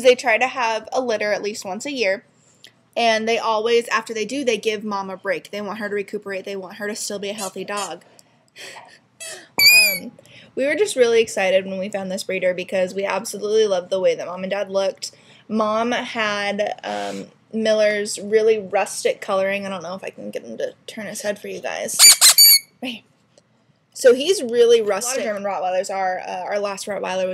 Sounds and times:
Speech: 0.0s - 2.2s, 3.0s - 8.1s, 9.9s - 22.0s, 22.8s - 23.1s, 24.0s - 27.3s.

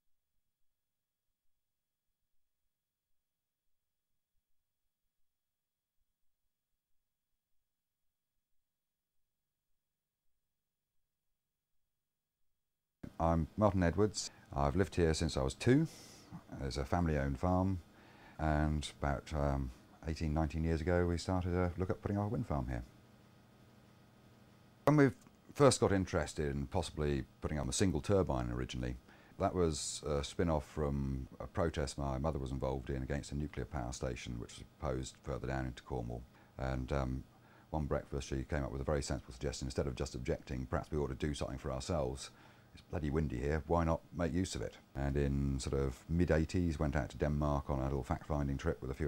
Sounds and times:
Speech: 13.0s - 17.8s, 18.4s - 22.9s, 24.9s - 49.0s.

